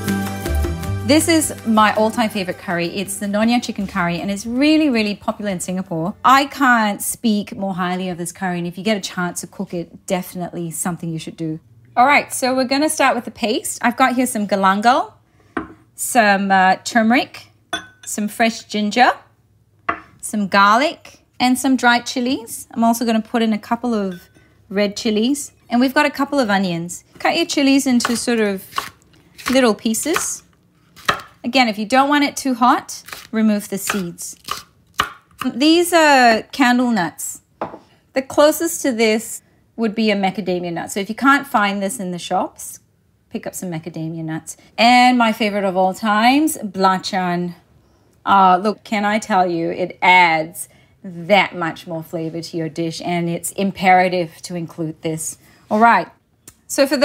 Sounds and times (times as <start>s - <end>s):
Speech: 1.1s - 15.2s, 16.0s - 17.5s, 18.1s - 19.3s, 20.2s - 28.7s, 29.5s - 30.5s, 31.4s - 34.4s, 35.4s - 37.4s, 38.2s - 47.6s, 48.3s - 57.0s.